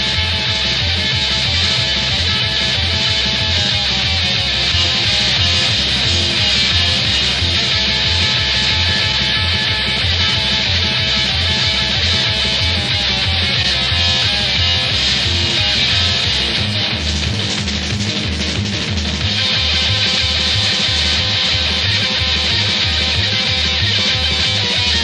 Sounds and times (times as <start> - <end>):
Music: 0.0 - 25.0.